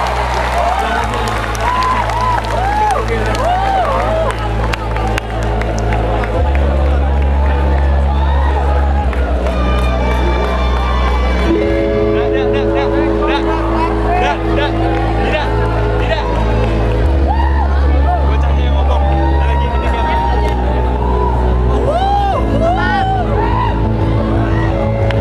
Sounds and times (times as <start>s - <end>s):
Music: 0.0s - 25.2s.